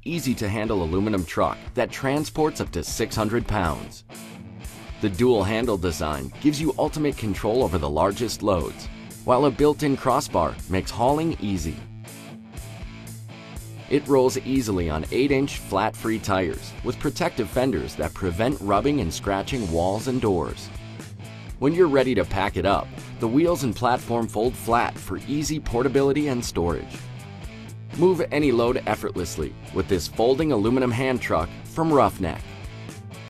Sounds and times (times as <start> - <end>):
Speech: 0.0 - 4.0, 5.0 - 11.8, 13.9 - 20.8, 21.6 - 27.0, 28.0 - 32.5
Music: 0.0 - 33.2.